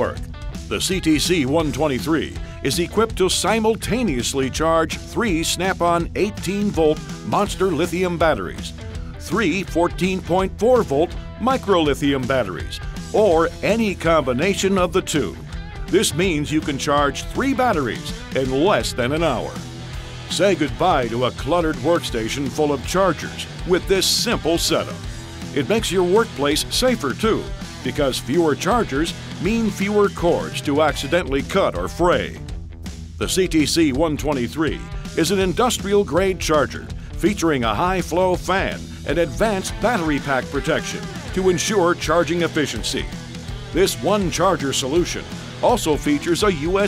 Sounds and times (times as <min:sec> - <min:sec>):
Speech: 0:00.0 - 0:19.6, 0:20.3 - 0:32.4, 0:33.2 - 0:43.1, 0:43.8 - 0:46.8
Music: 0:00.0 - 0:46.8.